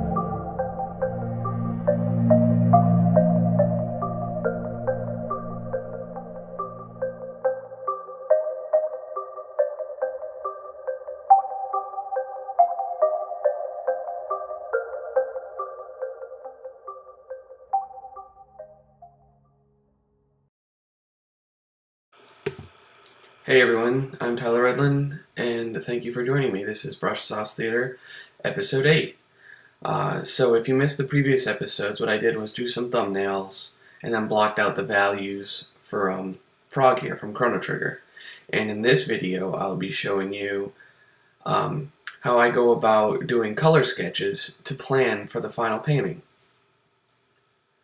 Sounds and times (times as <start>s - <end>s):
Music: 0.0s - 20.5s
Speech: 23.5s - 29.2s, 29.8s - 40.8s, 41.4s - 46.2s.